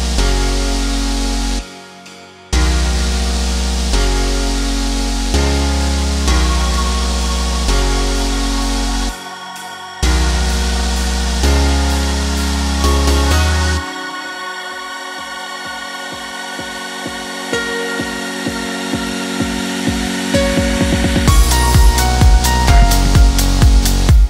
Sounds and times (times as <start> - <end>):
Music: 0.0 - 24.3.